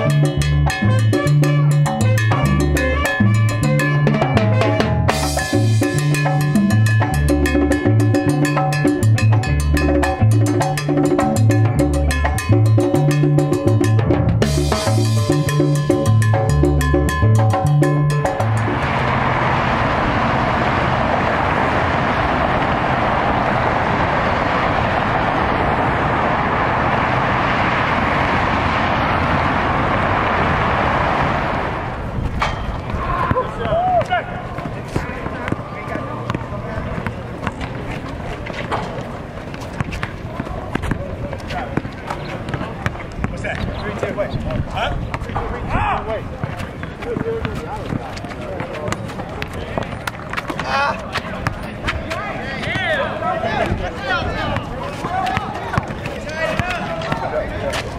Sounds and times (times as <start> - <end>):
Music: 0.0 - 19.0
Outside, urban or manmade: 0.0 - 57.9.